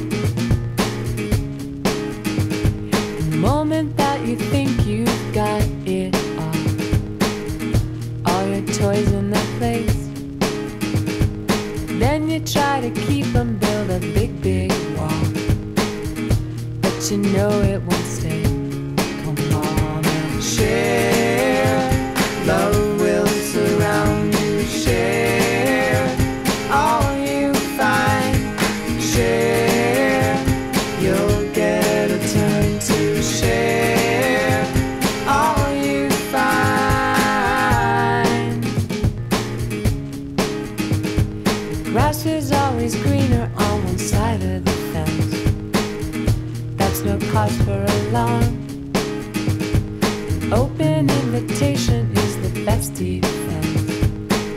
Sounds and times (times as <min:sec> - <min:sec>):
Grunge: 0:00.0 - 0:54.5.